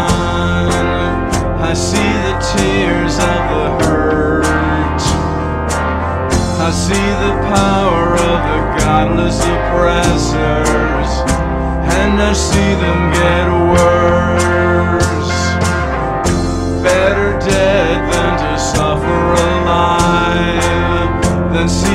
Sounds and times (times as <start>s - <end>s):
Music: 0.0s - 21.9s.